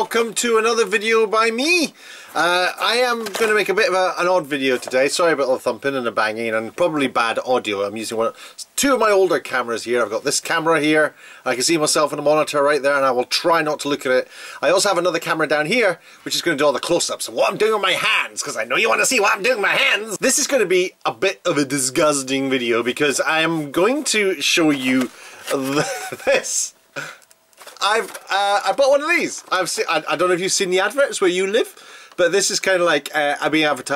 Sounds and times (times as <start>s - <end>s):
Speech: 0.0s - 26.8s, 27.8s - 33.9s.